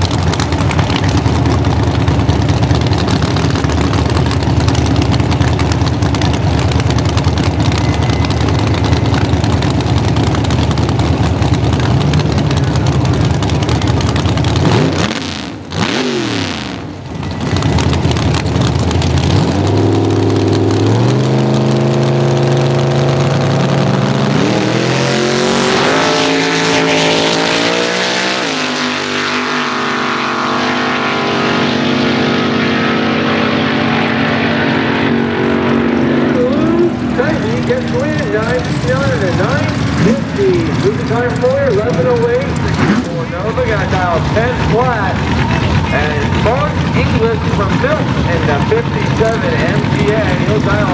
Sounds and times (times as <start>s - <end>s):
Motorcycle: 0.0s - 50.9s
Race car, auto racing: 0.0s - 50.9s.